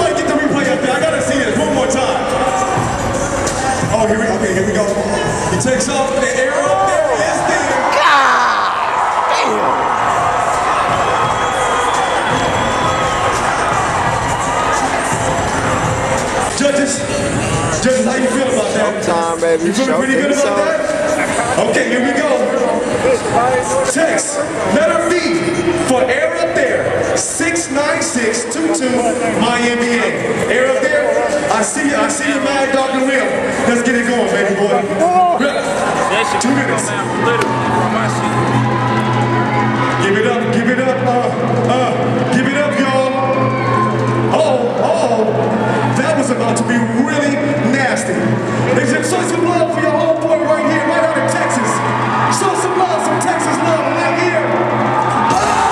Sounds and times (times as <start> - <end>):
Music: 0.0 - 7.9, 8.7 - 55.7
Cheering: 6.3 - 18.7, 33.8 - 55.7.